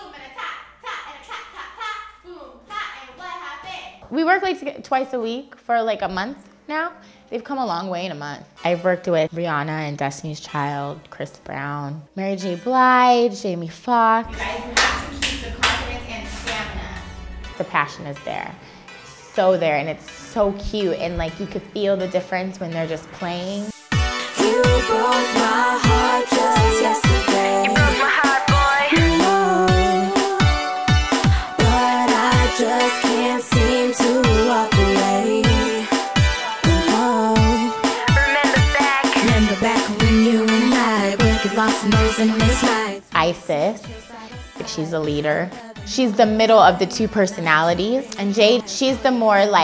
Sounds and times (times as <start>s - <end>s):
Pop music: 14.2s - 19.1s, 20.2s - 49.6s
Rhythm and blues: 14.3s - 18.4s, 20.2s - 49.6s
Singing: 24.2s - 43.1s, 43.8s - 46.0s.